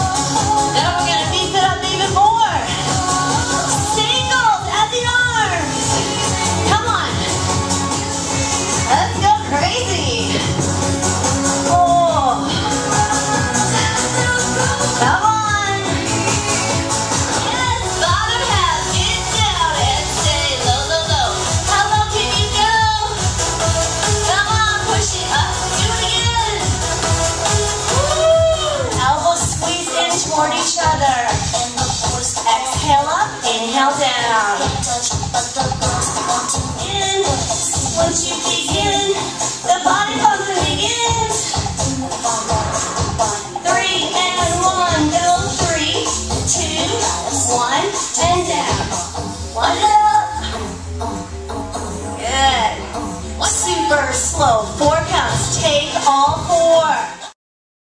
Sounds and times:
Music: 0.0s - 57.4s
Speech: 0.8s - 2.8s, 8.9s - 10.4s, 29.0s - 31.4s, 49.6s - 50.4s, 52.2s - 52.8s, 53.4s - 57.2s.

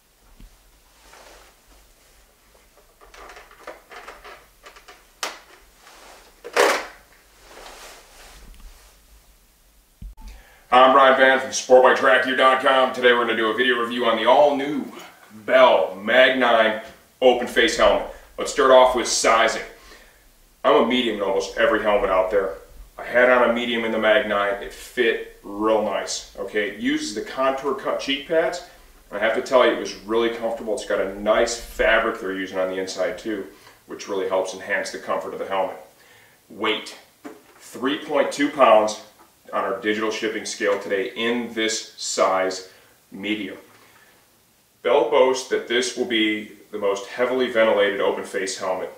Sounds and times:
Speech: 10.7s - 19.8s, 20.6s - 35.9s, 36.5s - 43.7s, 44.8s - 48.9s.

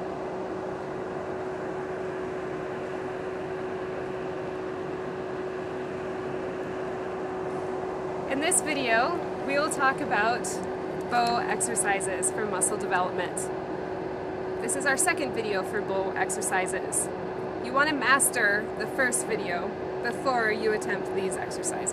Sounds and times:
Speech: 8.3s - 13.5s, 14.6s - 21.9s.

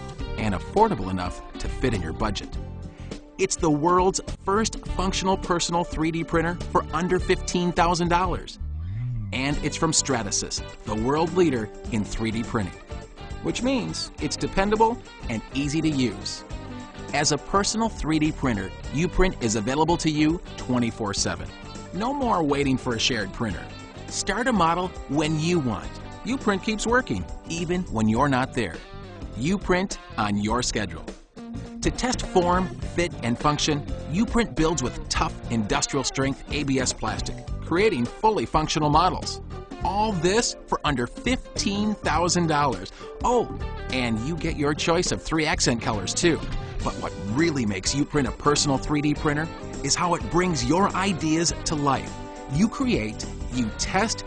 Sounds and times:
Music: 0.0s - 54.2s
Speech: 0.4s - 2.6s, 3.4s - 8.6s, 9.4s - 12.8s, 13.4s - 16.4s, 17.1s - 28.8s, 29.4s - 31.1s, 31.8s - 54.2s.

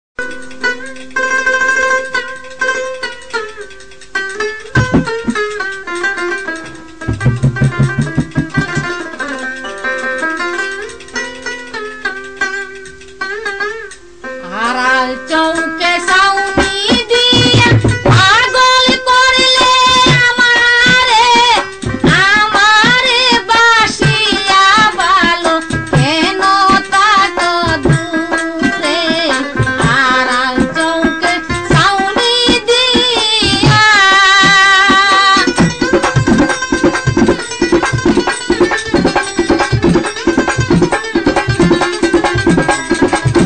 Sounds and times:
Ukulele: 0.2s - 14.2s, 16.4s - 43.4s
Mandolin: 0.2s - 43.4s.

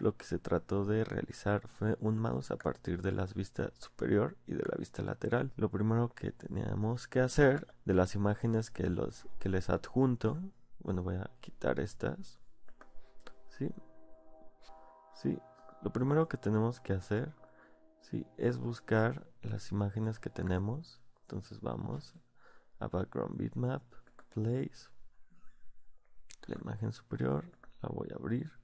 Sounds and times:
Speech: 0.0s - 12.4s, 13.5s - 13.9s, 15.2s - 17.4s, 18.0s - 22.2s, 22.8s - 25.0s, 26.3s - 28.6s
Music: 12.8s - 21.0s.

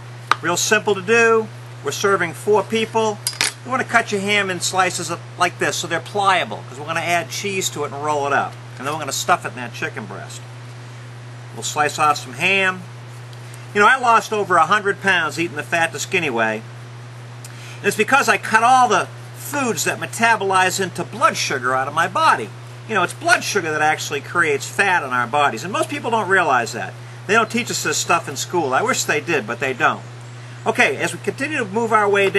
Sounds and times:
Speech: 0.4s - 10.4s, 11.6s - 12.9s, 13.8s - 16.7s, 17.8s - 30.0s, 30.6s - 32.3s.

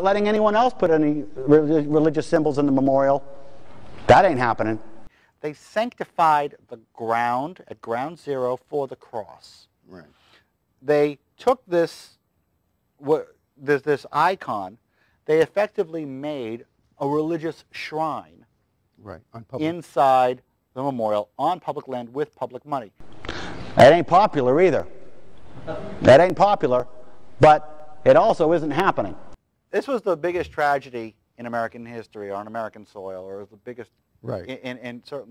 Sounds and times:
Male speech, man speaking: 0.0s - 3.2s, 4.1s - 4.8s, 5.4s - 10.1s, 10.8s - 12.2s, 13.0s - 18.4s, 19.0s - 22.9s, 23.8s - 24.9s, 26.0s - 35.3s
Narration, monologue: 0.0s - 35.3s.

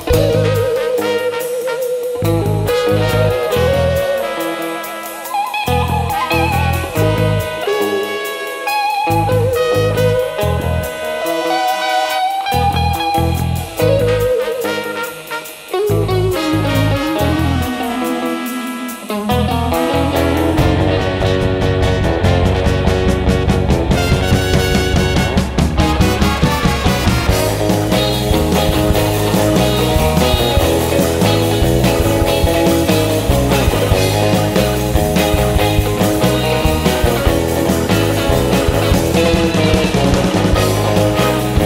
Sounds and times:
Psychedelic rock: 0.0s - 41.6s.

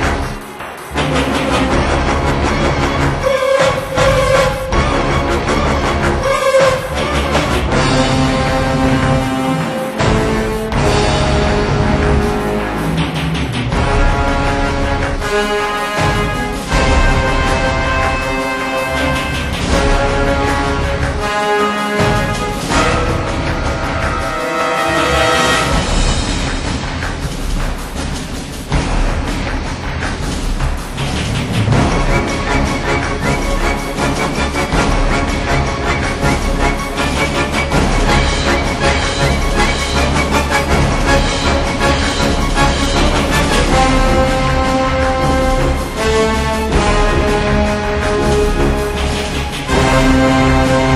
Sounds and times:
Music: 0.0s - 50.9s.

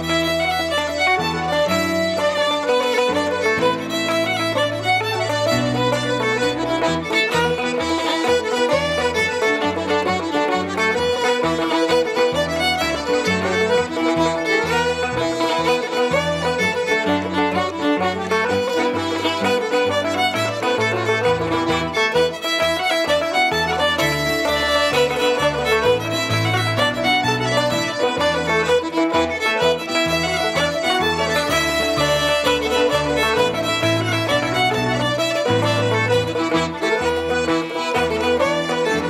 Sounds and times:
Violin, fiddle: 0.0s - 39.1s.

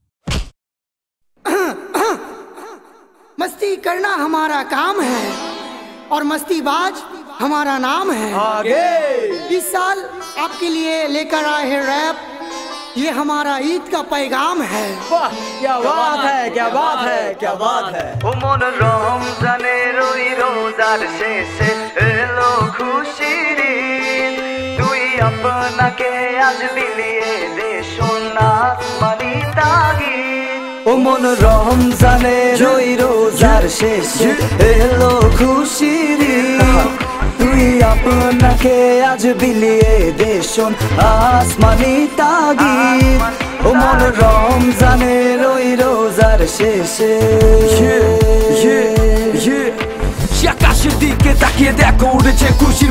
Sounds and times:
Music: 4.5s - 8.6s, 9.3s - 52.9s.

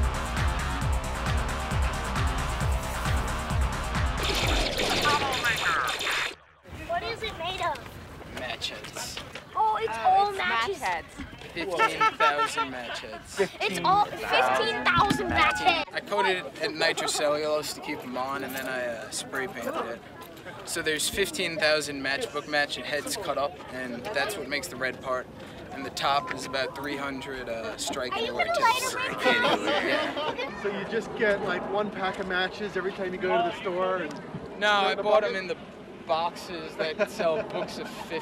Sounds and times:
Music: 0.0s - 5.4s.

